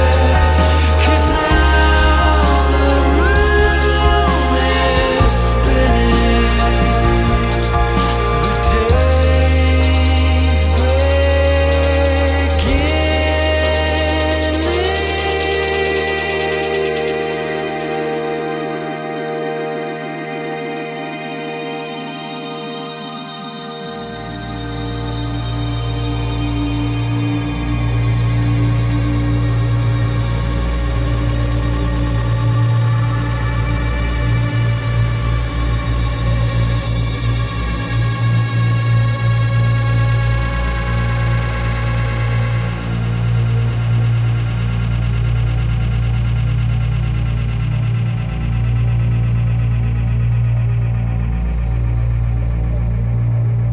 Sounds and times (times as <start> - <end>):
Scary music: 0.0 - 53.7.